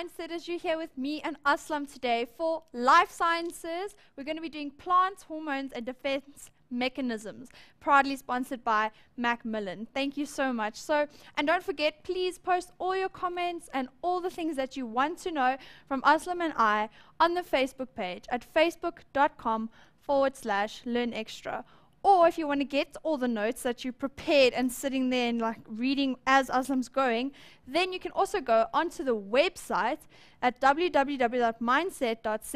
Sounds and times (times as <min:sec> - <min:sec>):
Speech: 0:00.0 - 0:32.5.